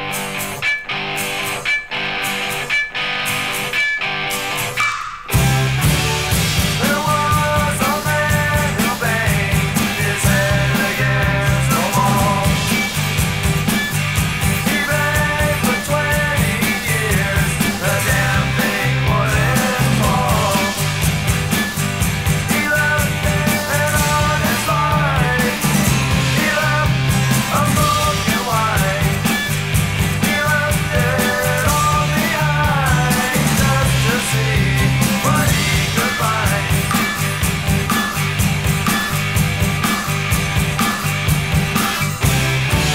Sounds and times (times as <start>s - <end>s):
Music: 0.0s - 42.9s.